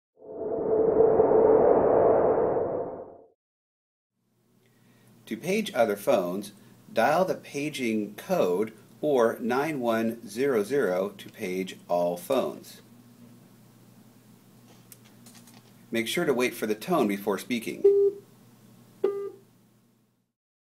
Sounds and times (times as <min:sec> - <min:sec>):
Speech: 0:05.3 - 0:12.9, 0:15.9 - 0:17.9.